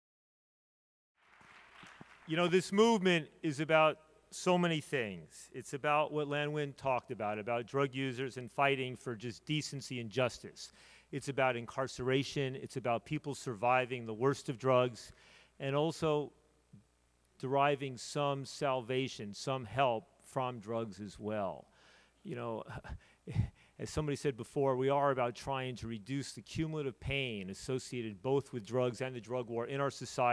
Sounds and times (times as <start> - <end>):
Speech: 2.3 - 16.4, 17.4 - 30.3.